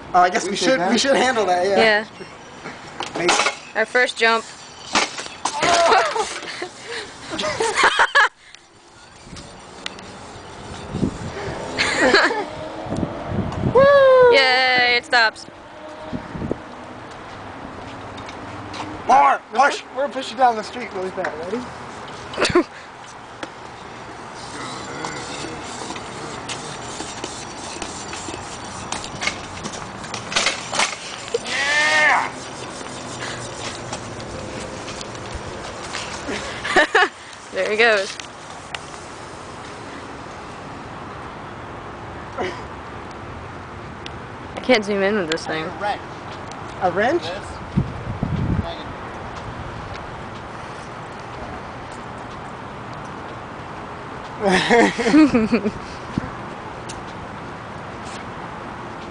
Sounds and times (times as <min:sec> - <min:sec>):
Bus: 0:04.8 - 0:19.2, 0:46.0 - 0:59.1.